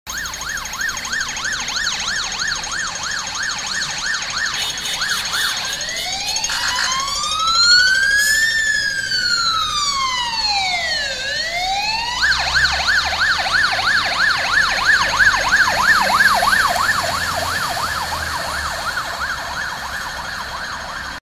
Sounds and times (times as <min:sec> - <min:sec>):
Fire engine, fire truck (siren): 0:00.0 - 0:21.2
Engine: 0:07.5 - 0:21.2.